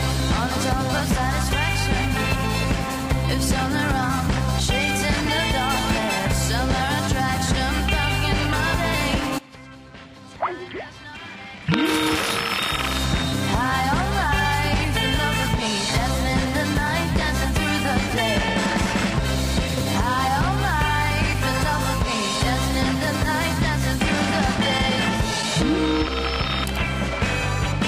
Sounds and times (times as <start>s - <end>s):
Music: 0.0s - 27.8s.